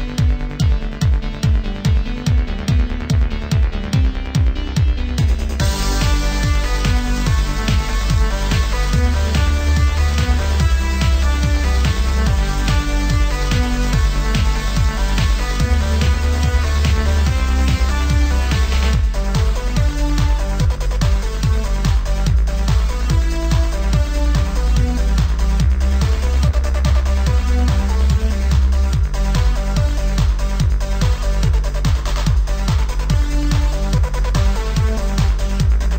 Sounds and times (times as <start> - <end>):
Video game music: 0.0 - 35.9.